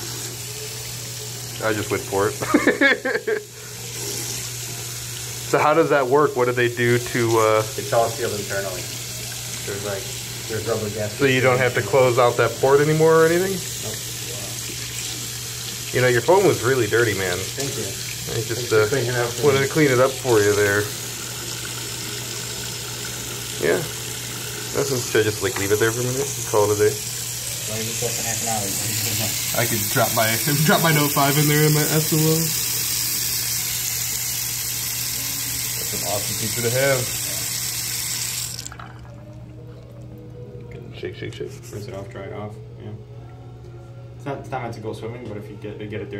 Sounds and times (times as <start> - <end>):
Speech: 1.6 - 2.4, 5.5 - 9.0, 15.9 - 20.9, 27.7 - 32.6, 35.8 - 37.4, 44.2 - 46.1.